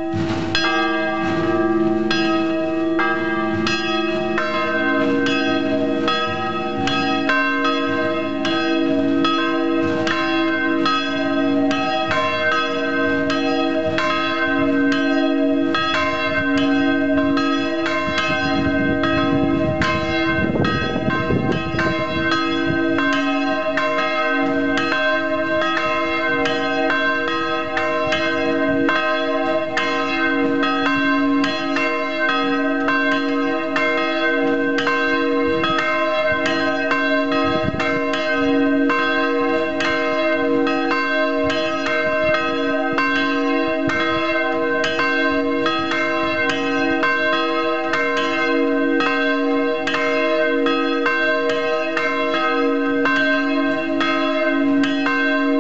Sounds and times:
Church bell: 0.0s - 55.6s.

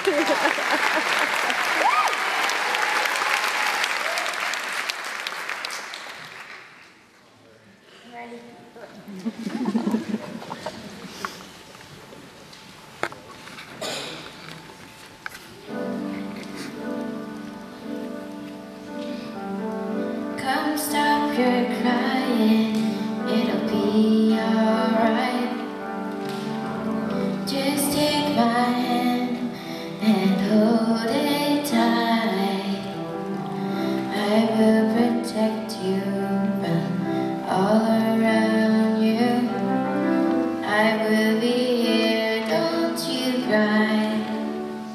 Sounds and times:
Music: 15.0s - 44.9s
Female singing: 20.4s - 25.8s, 27.3s - 33.0s, 34.0s - 40.0s, 40.6s - 44.5s.

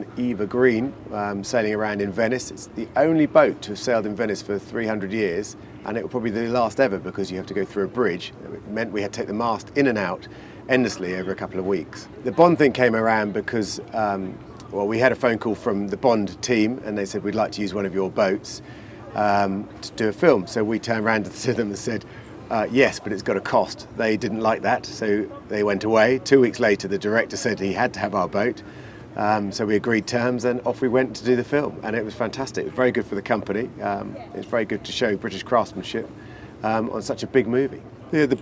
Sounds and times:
Speech: 0.0s - 38.4s.

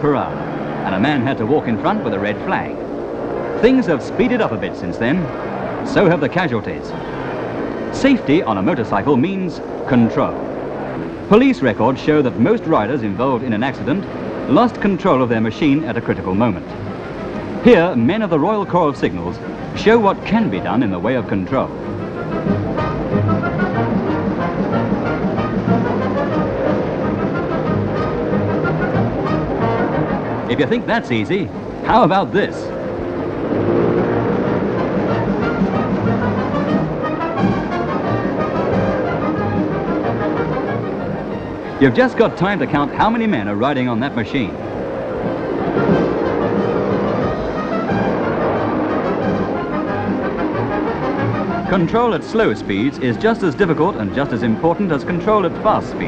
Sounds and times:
Speech: 0.0s - 2.8s, 3.6s - 5.3s, 5.9s - 7.0s, 8.0s - 10.4s, 11.3s - 16.7s, 17.6s - 21.7s, 30.5s - 32.7s, 41.8s - 44.6s, 51.7s - 56.0s.

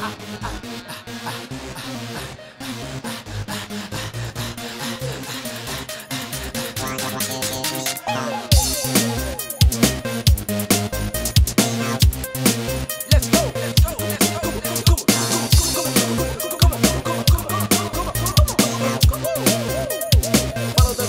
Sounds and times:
Music: 0.0s - 21.0s.

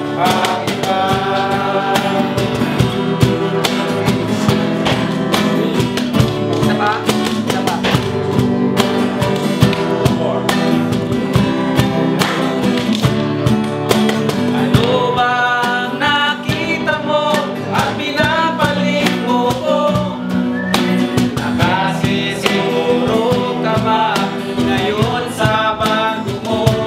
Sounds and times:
Singing: 0.0s - 5.9s, 14.5s - 26.8s
Music: 0.0s - 26.8s.

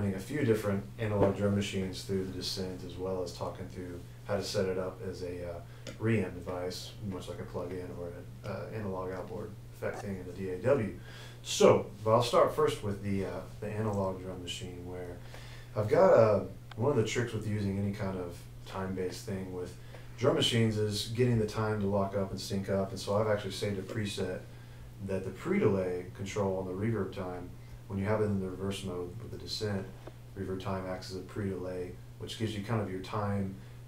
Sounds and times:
Speech: 0.0s - 33.6s.

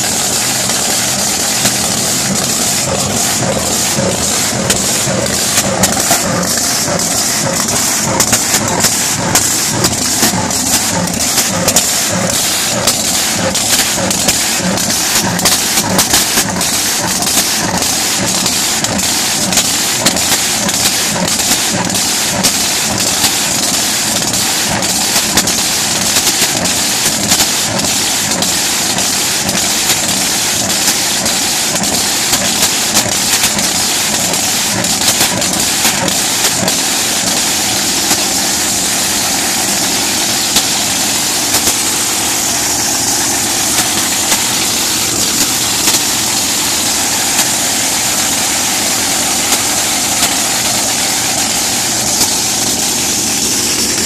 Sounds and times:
Vehicle: 0.0s - 54.0s.

